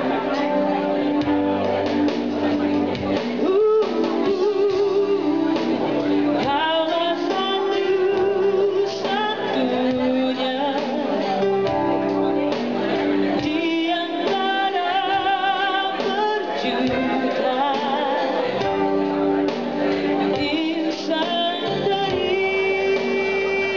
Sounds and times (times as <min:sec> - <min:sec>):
Music: 0:00.0 - 0:23.7
Speech: 0:00.0 - 0:23.7.